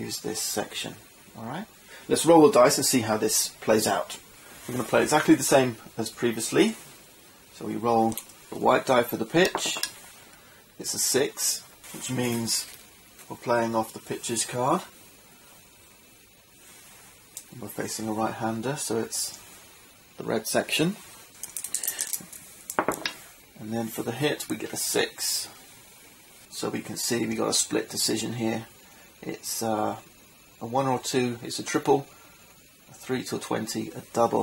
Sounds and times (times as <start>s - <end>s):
Speech: 0.0s - 6.8s, 7.6s - 9.9s, 10.8s - 15.0s, 17.5s - 19.4s, 20.2s - 21.0s, 23.6s - 25.6s, 26.5s - 32.1s, 32.9s - 34.4s.